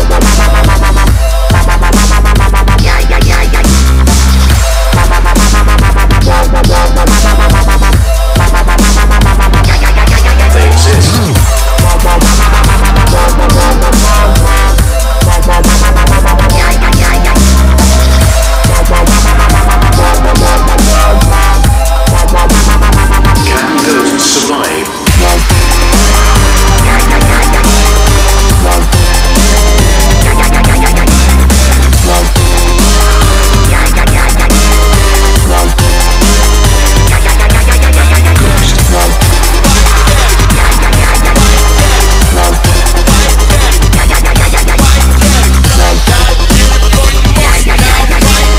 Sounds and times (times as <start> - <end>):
Drum and bass: 0.0 - 48.5
Dubstep: 0.0 - 48.5.